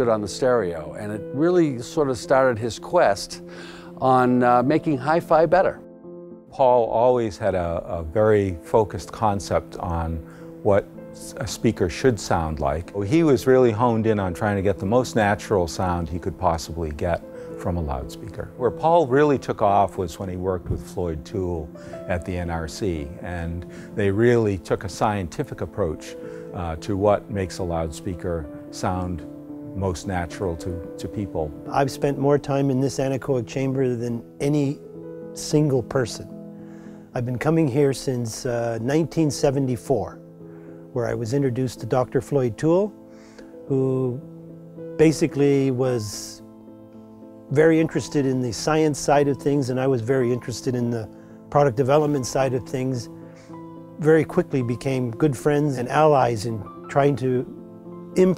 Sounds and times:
Speech: 0.0s - 3.4s, 4.0s - 5.8s, 6.6s - 34.8s, 35.4s - 36.3s, 37.2s - 40.2s, 41.0s - 43.0s, 43.7s - 44.2s, 45.0s - 46.4s, 47.5s - 53.1s, 54.0s - 57.6s, 58.2s - 58.3s
Music: 0.0s - 58.3s.

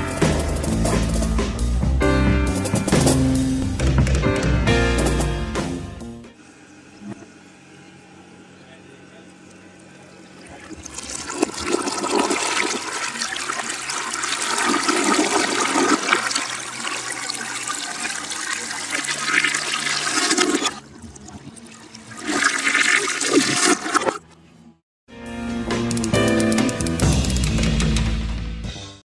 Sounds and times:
Water: 6.4s - 24.4s
Toilet flush: 10.2s - 24.2s.

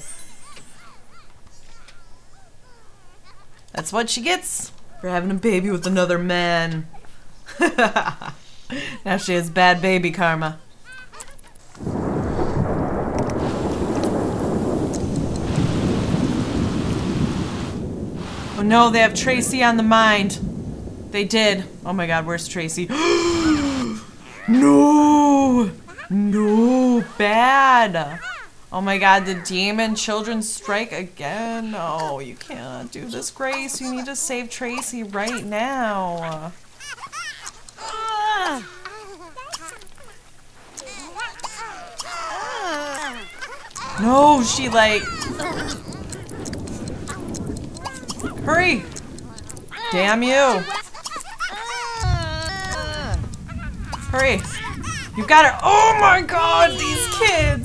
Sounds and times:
Rain: 0.0s - 57.6s.

